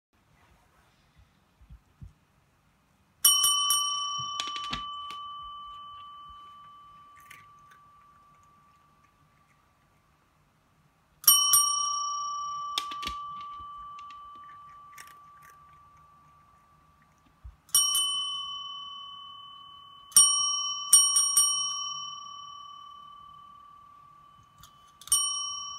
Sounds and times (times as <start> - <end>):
Inside, small room: 0.1 - 25.7
Bicycle bell: 3.2 - 9.1, 11.2 - 16.2, 17.7 - 25.7.